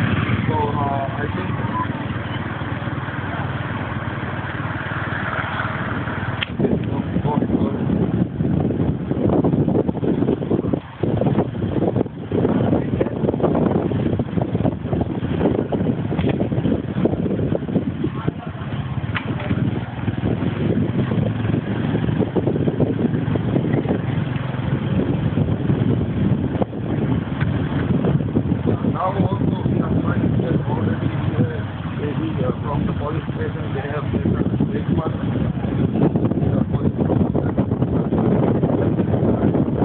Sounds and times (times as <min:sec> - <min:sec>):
Outside, urban or manmade: 0:00.0 - 0:39.8.